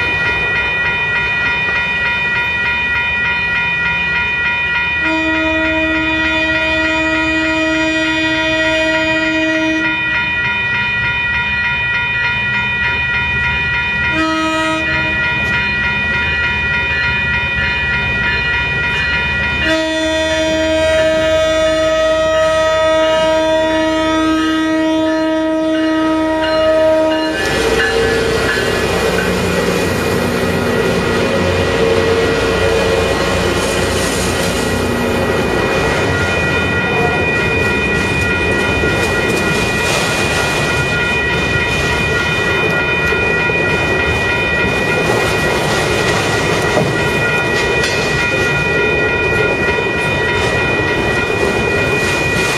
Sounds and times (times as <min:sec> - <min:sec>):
Outside, urban or manmade: 0:00.0 - 0:52.5
Railroad car, train wagon: 0:00.0 - 0:52.5
Train horn: 0:05.0 - 0:10.1, 0:14.1 - 0:15.2, 0:19.6 - 0:28.5.